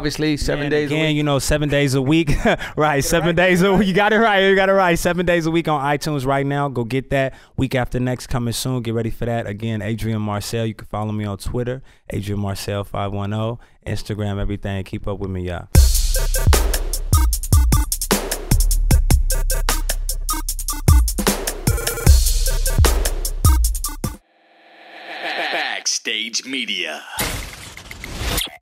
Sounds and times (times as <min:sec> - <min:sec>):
Speech: 0:00.0 - 0:15.8, 0:25.2 - 0:27.2
Drum machine: 0:15.8 - 0:24.2.